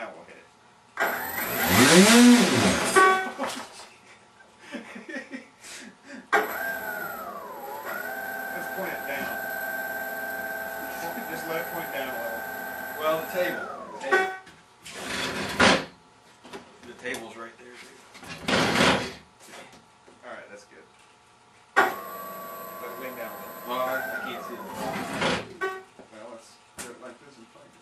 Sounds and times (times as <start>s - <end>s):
Speech: 0.0s - 0.5s, 11.0s - 12.4s, 16.8s - 18.0s, 19.5s - 20.9s, 26.1s - 27.8s.